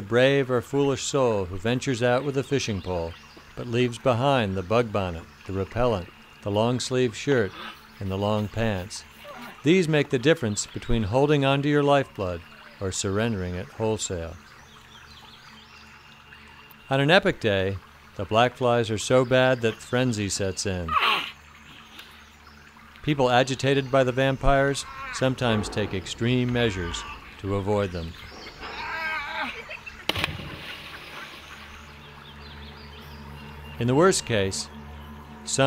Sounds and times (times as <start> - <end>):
Speech: 0.0 - 14.4, 16.9 - 21.0, 23.0 - 28.2, 33.8 - 34.7
Bird vocalization, bird call, bird song: 0.0 - 35.6.